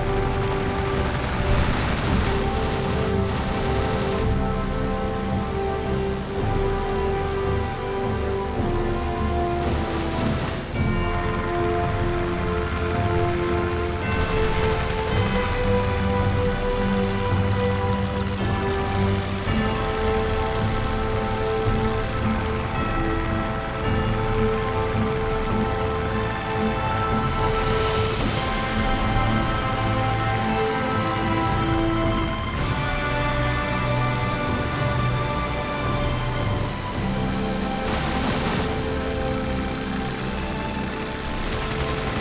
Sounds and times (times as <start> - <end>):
Music: 0.0 - 42.2.